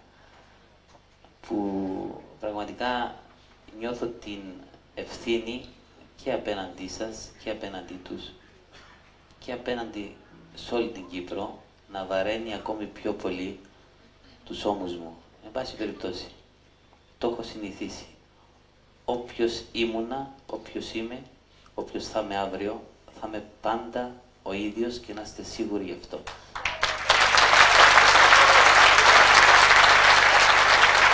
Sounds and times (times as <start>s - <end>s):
Speech: 1.4s - 8.4s, 9.4s - 16.4s, 17.2s - 18.2s, 19.1s - 26.3s.